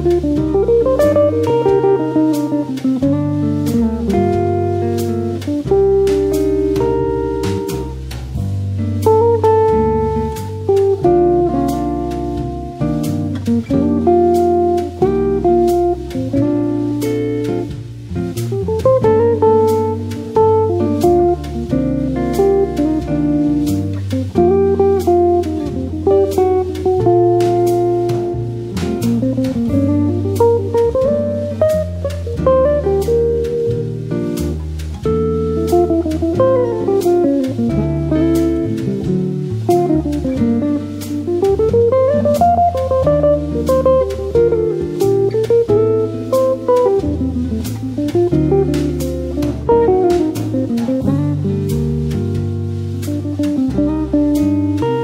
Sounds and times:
Acoustic guitar: 0.0 - 55.0
Strum: 0.0 - 55.0.

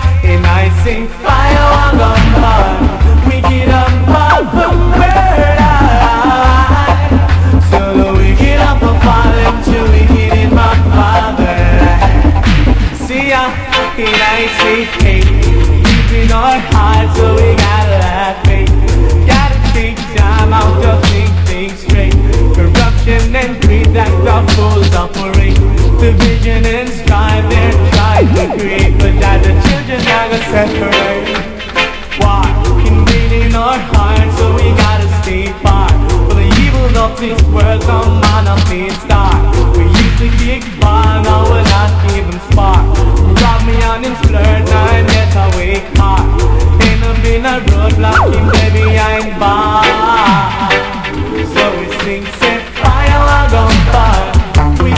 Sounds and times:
Music: 0.0 - 54.9.

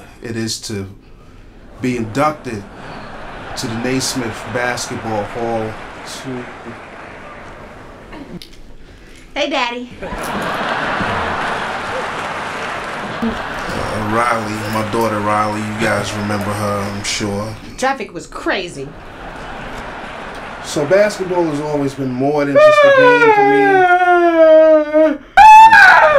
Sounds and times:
Male speech, man speaking: 0.0 - 1.0, 1.8 - 2.7, 3.6 - 6.8, 13.6 - 17.8, 20.6 - 24.3
Female speech, woman speaking: 9.4 - 10.0, 17.8 - 18.9.

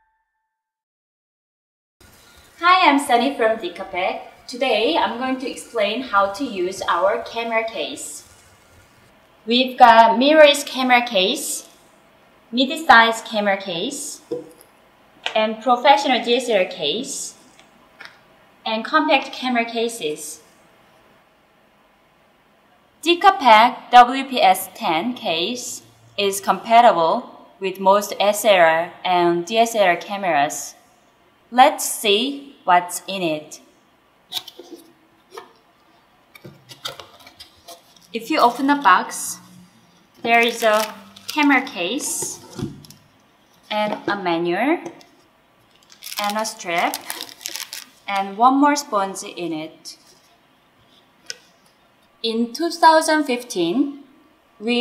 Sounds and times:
Speech: 2.6 - 8.3, 9.5 - 11.7, 12.6 - 14.3, 15.3 - 17.4, 18.7 - 20.5, 23.0 - 30.8, 31.6 - 33.6, 38.2 - 39.5, 40.3 - 42.6, 43.7 - 45.0, 46.2 - 47.1, 48.1 - 50.1, 52.3 - 54.0.

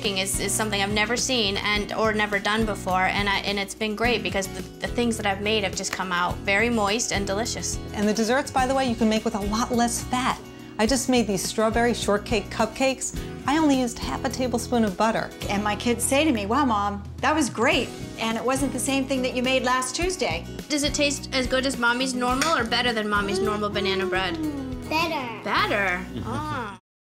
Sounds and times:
Music: 0.0 - 26.8.

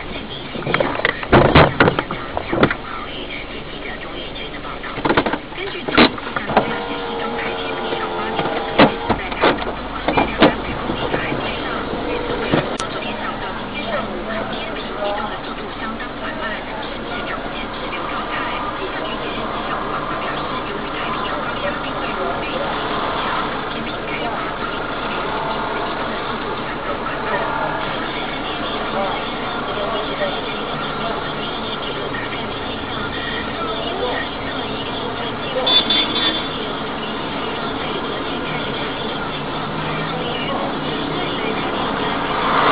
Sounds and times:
Speech: 0.0 - 42.7.

